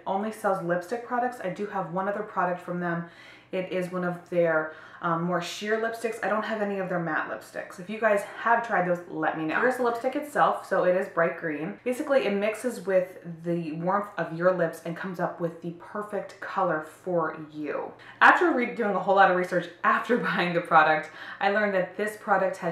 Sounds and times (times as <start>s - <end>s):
Speech: 0.0s - 22.7s.